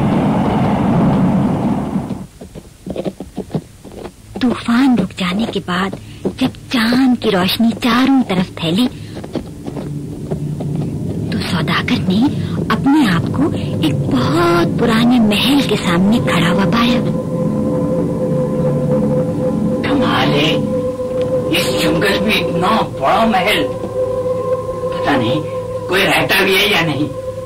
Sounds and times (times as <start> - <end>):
Speech: 4.4 - 8.9, 11.4 - 17.1, 19.8 - 20.7, 21.5 - 23.8, 24.9 - 27.1
Music: 9.2 - 27.4.